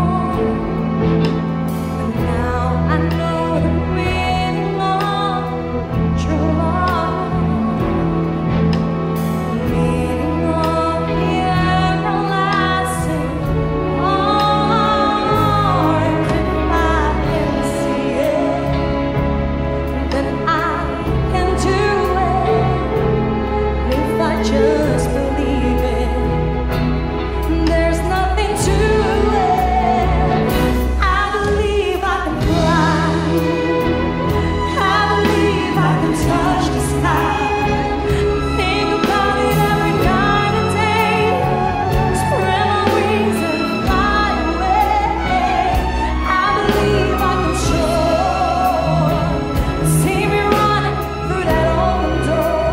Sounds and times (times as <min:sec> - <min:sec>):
Orchestra: 0:00.0 - 0:52.7.